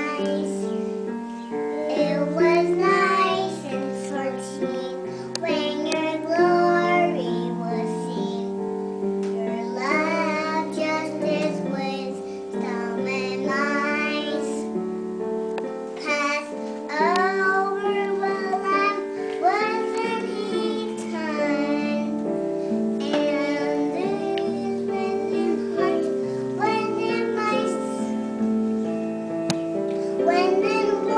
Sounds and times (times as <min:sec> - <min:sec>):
Child singing: 0:00.0 - 0:00.8, 0:01.5 - 0:08.6, 0:09.3 - 0:14.8, 0:16.0 - 0:22.3, 0:23.0 - 0:28.2, 0:30.2 - 0:31.1
Music: 0:00.0 - 0:31.1.